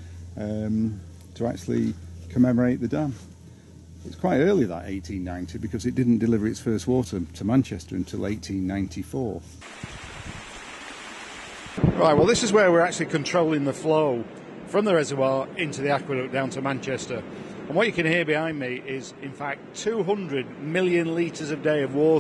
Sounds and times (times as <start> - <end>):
Speech: 0.4 - 3.2, 4.0 - 9.5, 12.0 - 22.2
Stream: 9.6 - 11.8.